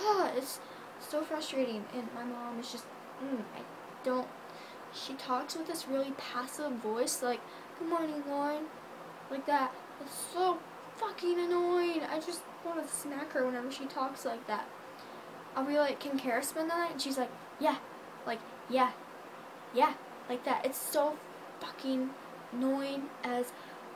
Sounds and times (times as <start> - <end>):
Speech: 0.0 - 4.3, 4.9 - 8.7, 9.3 - 14.7, 15.6 - 19.0, 19.8 - 23.6
Inside, small room: 0.0 - 23.9.